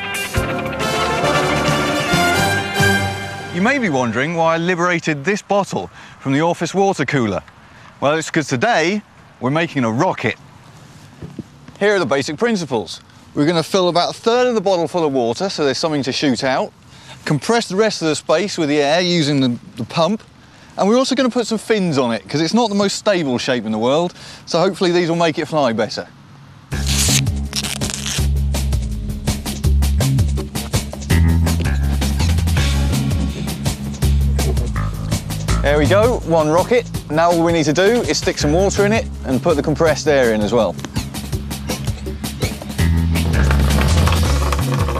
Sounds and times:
Speech: 3.6 - 7.4, 8.0 - 10.4, 11.8 - 26.2, 35.6 - 40.8.

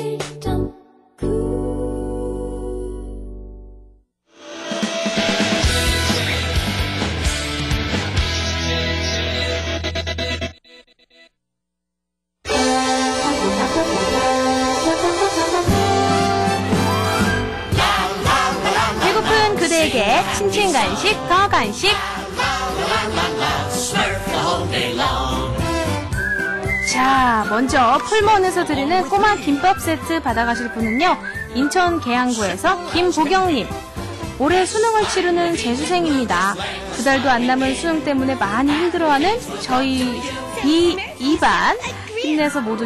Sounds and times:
Music: 0.0 - 11.3, 12.4 - 42.8.

